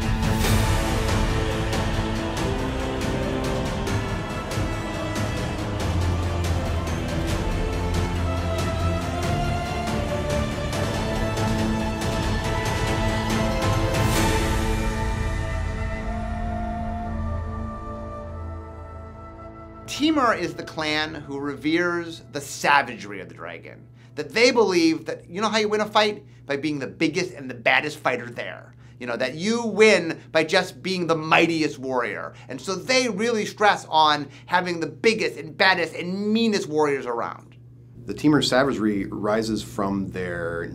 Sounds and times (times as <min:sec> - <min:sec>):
Speech: 0:19.9 - 0:40.7.